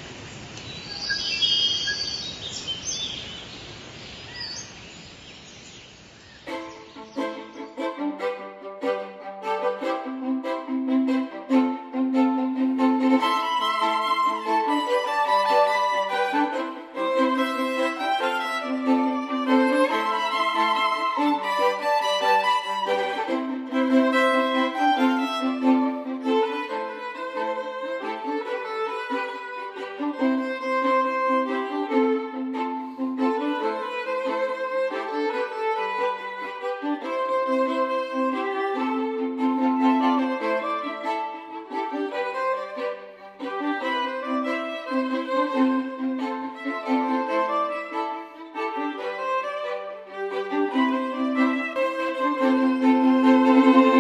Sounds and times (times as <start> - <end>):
Violin, fiddle: 6.4 - 54.0.